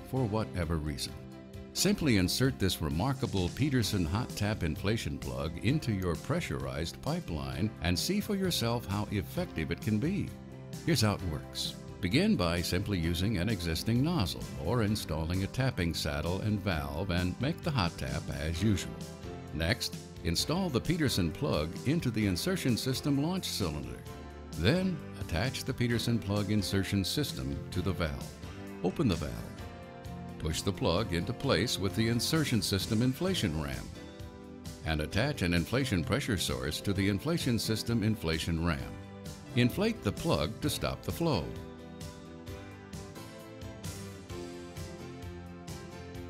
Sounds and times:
Speech: 0:00.0 - 0:01.2, 0:01.8 - 0:29.6, 0:30.4 - 0:34.0, 0:34.8 - 0:41.6
Music: 0:00.0 - 0:46.2.

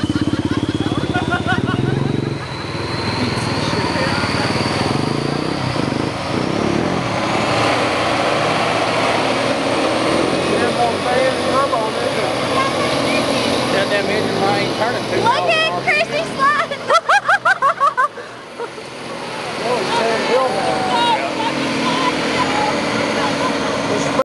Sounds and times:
Truck: 0:00.0 - 0:24.2.

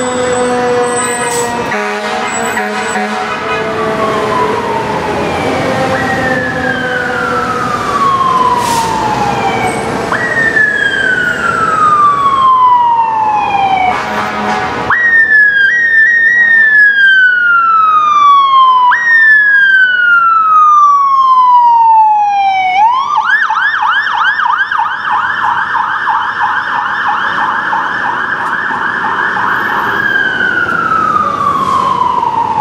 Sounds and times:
Emergency vehicle: 0:00.0 - 0:32.6.

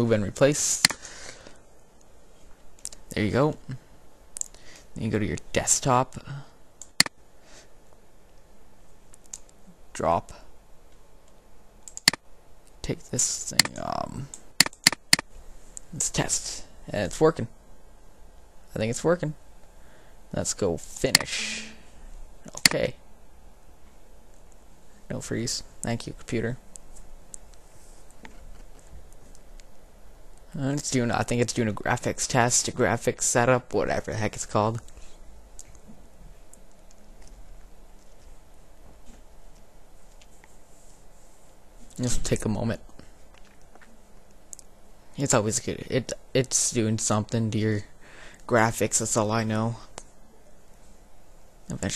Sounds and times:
Speech: 0:00.0 - 0:00.9, 0:03.1 - 0:03.8, 0:05.0 - 0:06.5, 0:09.9 - 0:10.5, 0:12.8 - 0:14.3, 0:15.9 - 0:17.5, 0:18.7 - 0:19.4, 0:20.3 - 0:21.8, 0:22.5 - 0:23.0, 0:25.1 - 0:26.6, 0:30.5 - 0:34.9, 0:42.0 - 0:42.9, 0:45.2 - 0:47.9, 0:48.5 - 0:49.9, 0:51.7 - 0:51.9.

